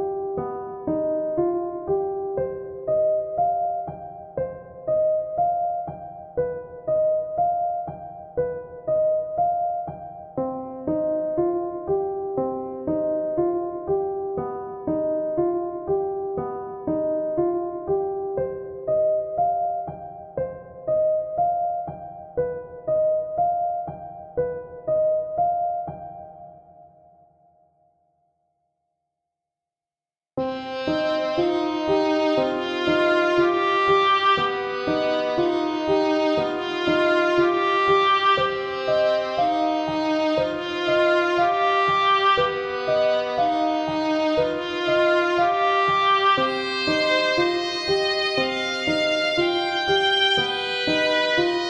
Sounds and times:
Music: 0:00.0 - 0:29.0, 0:30.4 - 0:51.7.

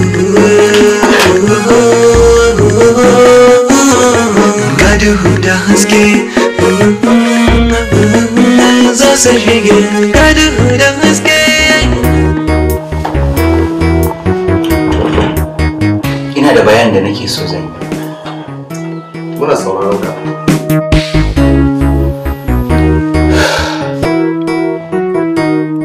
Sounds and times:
Music: 0:00.0 - 0:25.8.

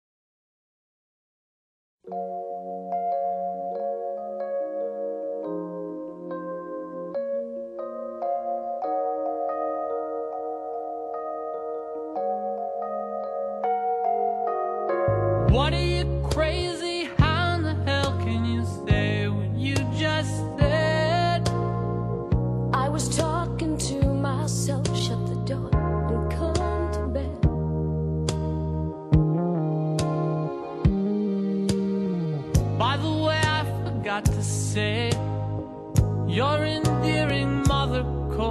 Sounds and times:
Music: 0:02.0 - 0:38.5.

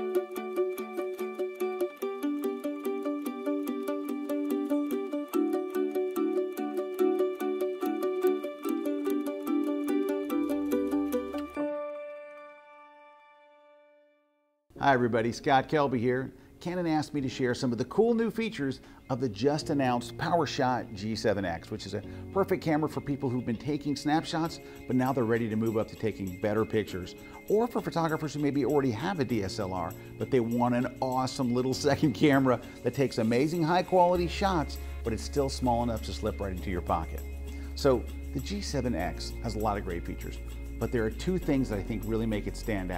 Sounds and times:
Music: 0:00.0 - 0:42.9
Speech: 0:14.8 - 0:37.2, 0:37.8 - 0:42.9.

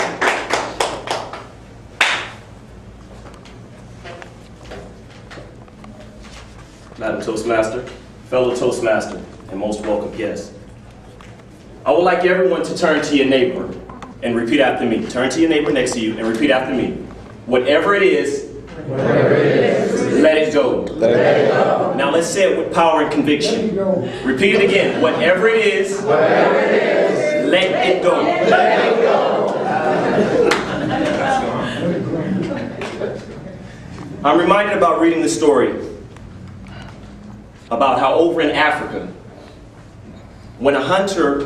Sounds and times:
Narration, monologue: 0:06.6 - 0:18.8, 0:21.9 - 0:26.3, 0:34.0 - 0:41.4
Male speech, man speaking: 0:07.0 - 0:10.6, 0:11.8 - 0:18.6, 0:19.9 - 0:26.2, 0:27.2 - 0:29.1, 0:34.2 - 0:36.0, 0:37.7 - 0:39.2, 0:40.6 - 0:41.4.

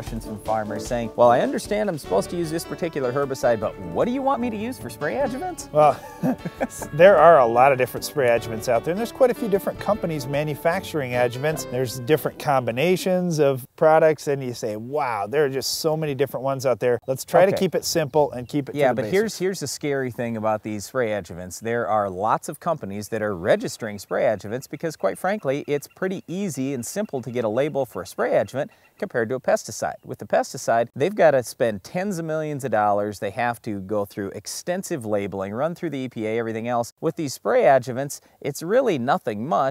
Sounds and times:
Speech: 0:00.0 - 0:06.0, 0:06.7 - 0:39.7.

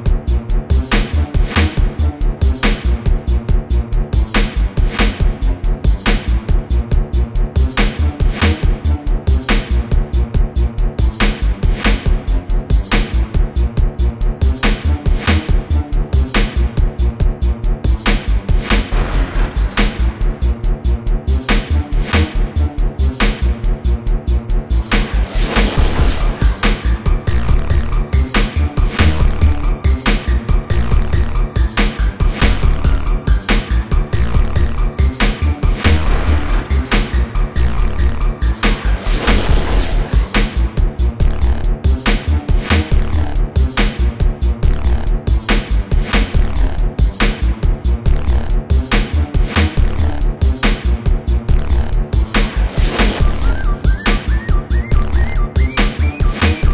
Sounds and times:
Soundtrack music: 0:00.0 - 0:56.7.

